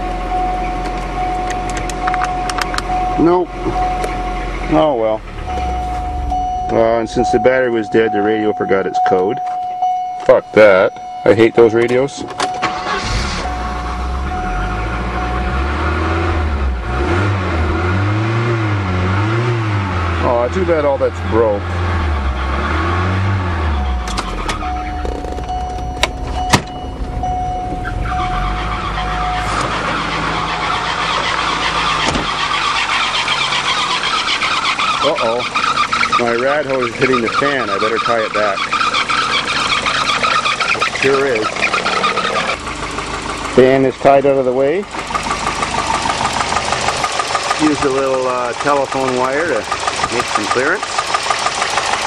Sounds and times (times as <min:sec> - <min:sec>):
Car: 0:00.0 - 0:52.0
Speech: 0:03.2 - 0:03.5, 0:04.7 - 0:05.2, 0:06.7 - 0:09.4, 0:10.3 - 0:12.3, 0:20.2 - 0:21.6, 0:35.0 - 0:35.5, 0:36.2 - 0:38.6, 0:40.8 - 0:41.5, 0:43.6 - 0:44.9, 0:47.6 - 0:50.8.